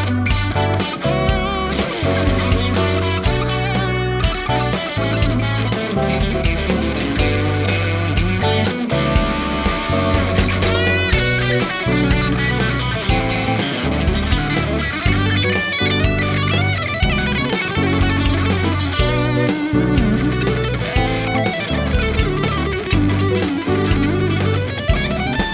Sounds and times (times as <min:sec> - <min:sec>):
Electric guitar: 0:00.0 - 0:25.5.